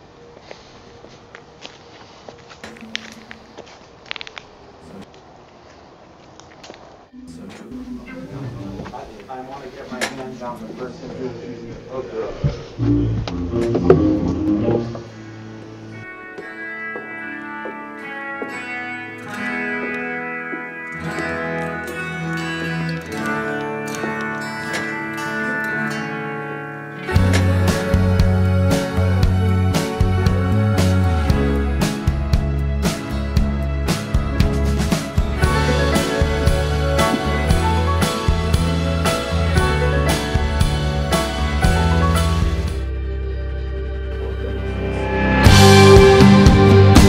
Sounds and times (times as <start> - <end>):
Music: 12.8 - 47.0.